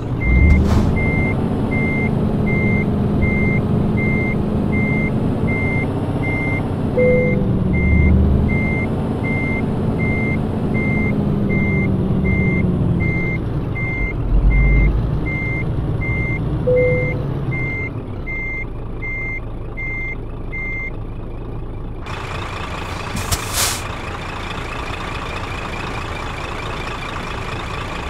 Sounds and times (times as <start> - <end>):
Reversing beeps: 0.2 - 20.9.